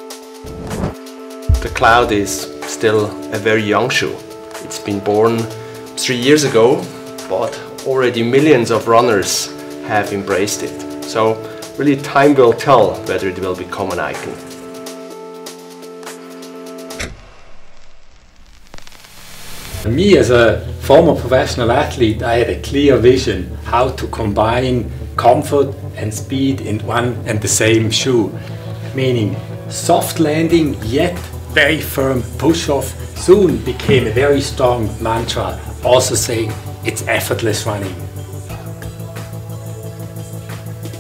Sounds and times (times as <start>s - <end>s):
Music: 0.0s - 41.0s
Speech: 1.5s - 14.5s, 19.8s - 38.0s.